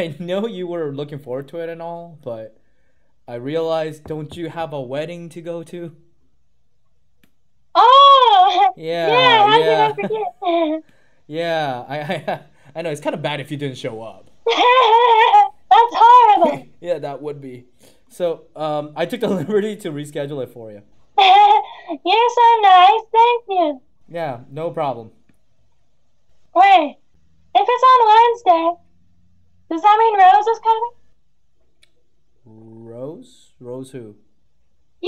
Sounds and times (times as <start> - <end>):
Speech: 8.8 - 10.2.